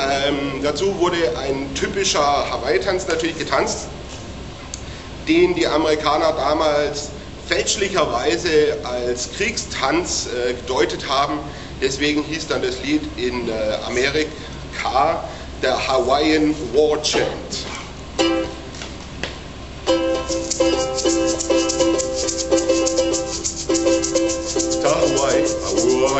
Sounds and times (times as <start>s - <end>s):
Speech: 0.0s - 4.0s, 5.3s - 17.8s, 24.8s - 26.1s
Inside, large room or hall: 0.0s - 26.1s.